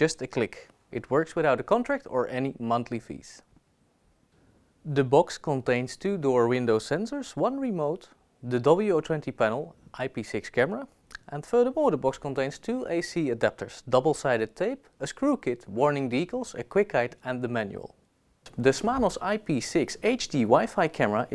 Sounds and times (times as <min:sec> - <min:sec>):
Speech: 0:00.0 - 0:03.5, 0:04.8 - 0:21.3.